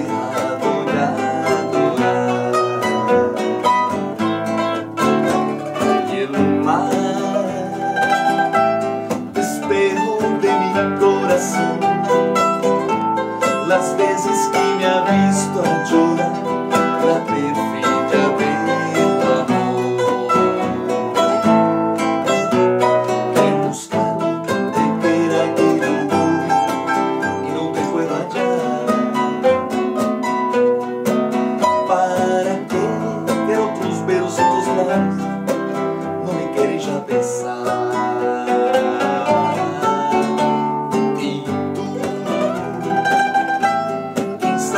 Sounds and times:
Mandolin: 0:00.0 - 0:44.7.

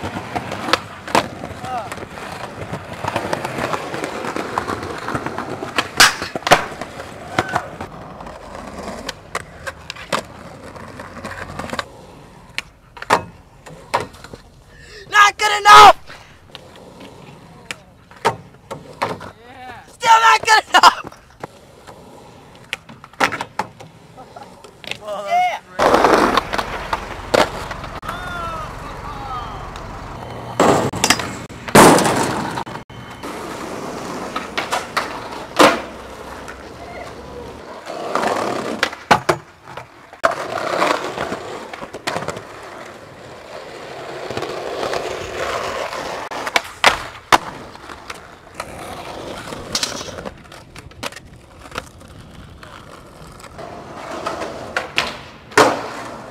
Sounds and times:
Skateboard: 0:00.0 - 0:14.6, 0:15.5 - 0:28.7, 0:29.7 - 0:56.3
Speech: 0:25.0 - 0:25.9.

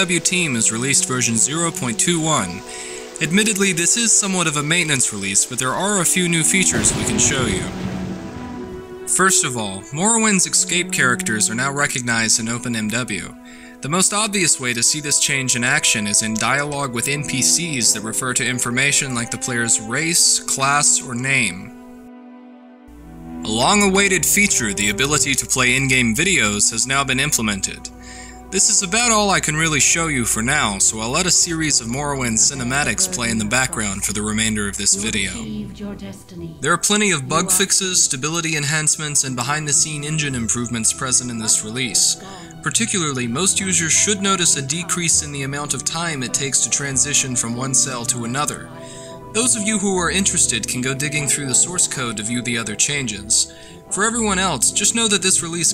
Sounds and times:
Speech: 0:00.0 - 0:02.6, 0:03.2 - 0:07.8, 0:09.1 - 0:21.7, 0:23.4 - 0:27.9, 0:28.5 - 0:48.7, 0:49.4 - 0:55.7
Music: 0:00.0 - 0:55.7.

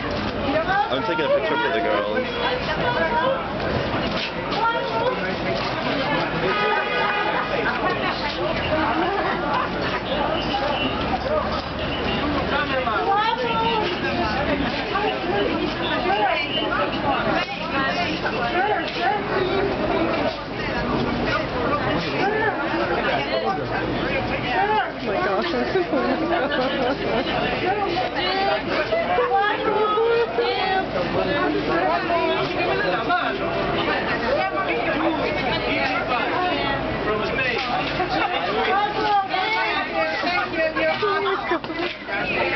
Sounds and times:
Speech: 0:00.0 - 0:42.5.

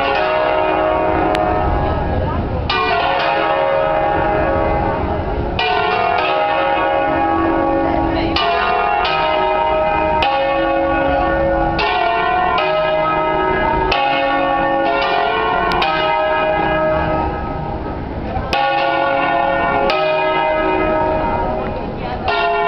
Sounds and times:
Bell: 0:00.0 - 0:22.6.

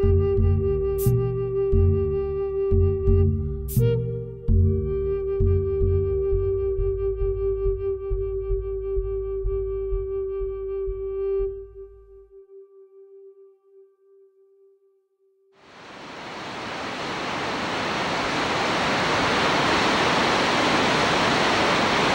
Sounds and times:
Waves, surf: 0:15.6 - 0:22.1.

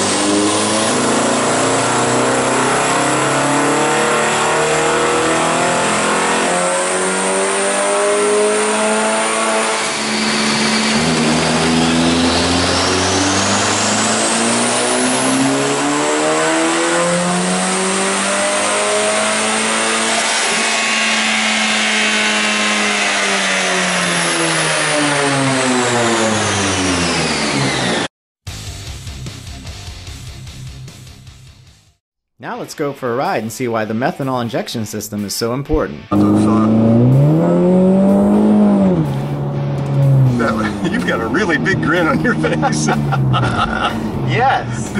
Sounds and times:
Vehicle: 0:00.0 - 0:28.1, 0:36.2 - 0:44.9.

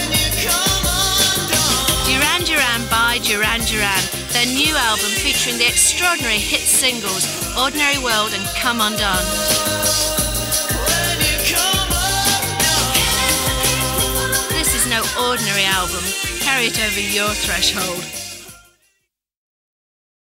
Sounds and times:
Music: 0:00.0 - 0:19.2
Speech: 0:02.1 - 0:09.4, 0:14.5 - 0:18.1.

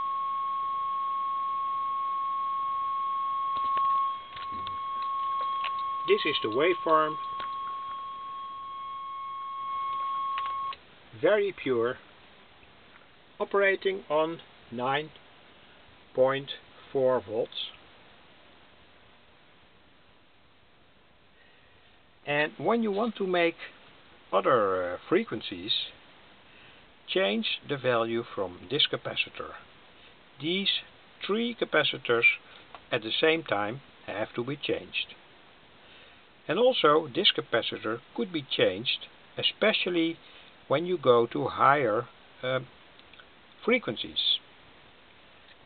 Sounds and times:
Speech: 0:06.1 - 0:07.2, 0:11.2 - 0:12.0, 0:13.4 - 0:15.2, 0:16.1 - 0:17.8, 0:22.2 - 0:26.0, 0:27.1 - 0:29.7, 0:30.4 - 0:35.2, 0:36.5 - 0:42.7, 0:43.6 - 0:44.5.

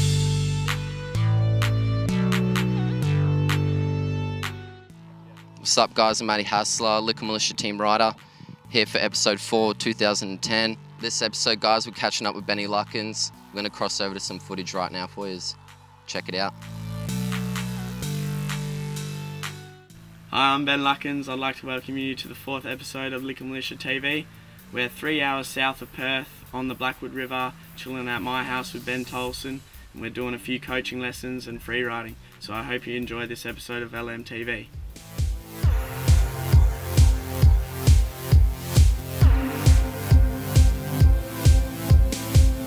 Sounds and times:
Music: 0:00.0 - 0:42.6
Speech: 0:05.6 - 0:16.6, 0:20.3 - 0:34.8.

